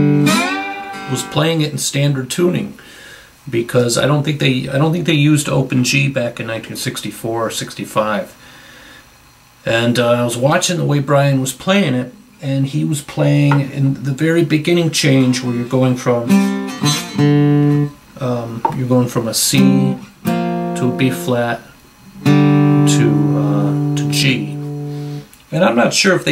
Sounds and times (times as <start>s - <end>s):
Speech: 1.1s - 2.8s, 3.5s - 8.4s, 9.6s - 16.4s, 18.2s - 20.0s, 20.8s - 21.7s, 22.8s - 24.6s, 25.5s - 26.3s.